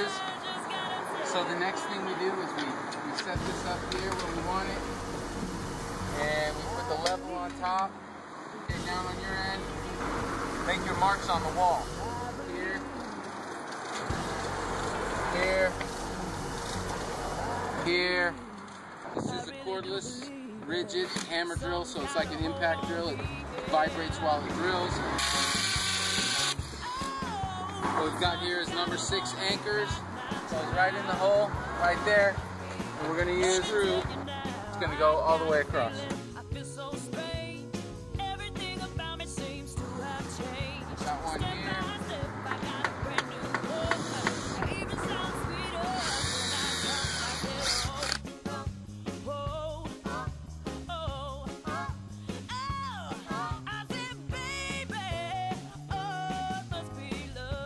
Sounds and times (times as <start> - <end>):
Music: 0.0 - 2.0, 3.2 - 8.0, 8.7 - 13.5, 14.1 - 57.6
Outside, urban or manmade: 0.0 - 57.6
Speech: 28.0 - 32.4, 33.0 - 36.1.